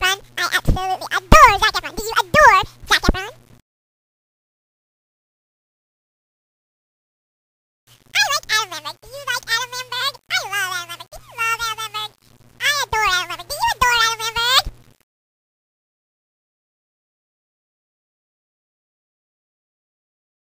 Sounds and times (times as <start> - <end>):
Speech: 0.0 - 3.4, 8.1 - 14.7.